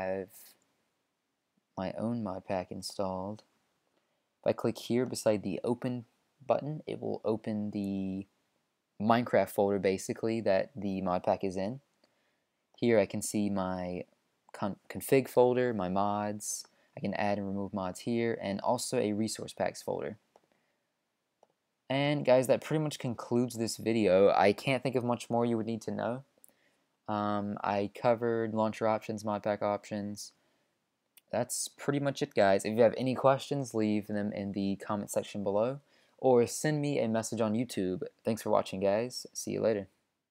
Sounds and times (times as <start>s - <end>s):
Speech: 0.0s - 0.6s, 1.8s - 3.5s, 4.4s - 8.4s, 9.0s - 11.9s, 12.8s - 20.3s, 21.9s - 26.4s, 27.1s - 30.4s, 31.2s - 40.0s.